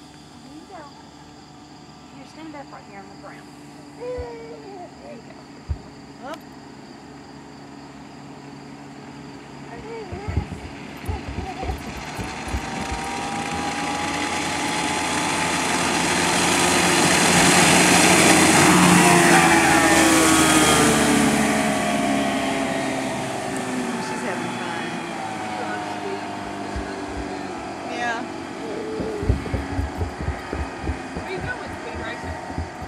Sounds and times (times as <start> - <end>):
Motorboat, speedboat: 9.8 - 32.8.